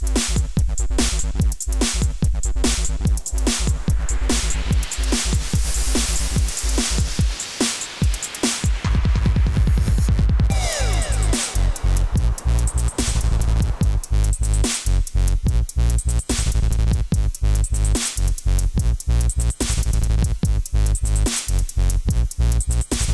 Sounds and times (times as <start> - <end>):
Dubstep: 0.0 - 23.1.